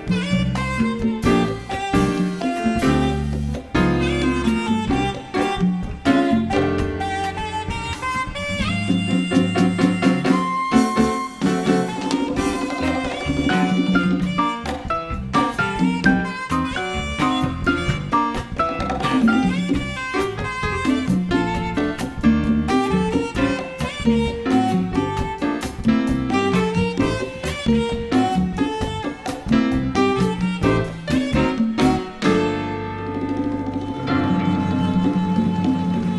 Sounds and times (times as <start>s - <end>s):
Drum: 0.0s - 36.1s
Drum kit: 0.0s - 36.1s
Jazz: 0.0s - 36.1s.